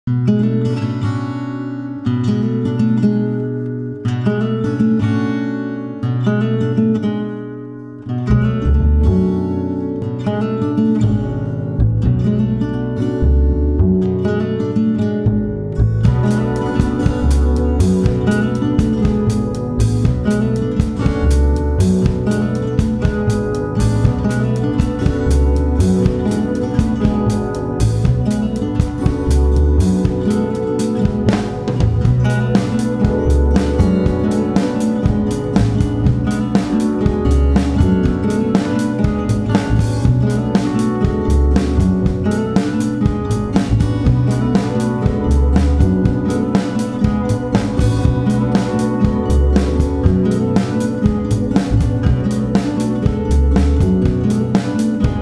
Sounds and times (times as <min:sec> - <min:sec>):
Music: 0:00.0 - 0:55.2.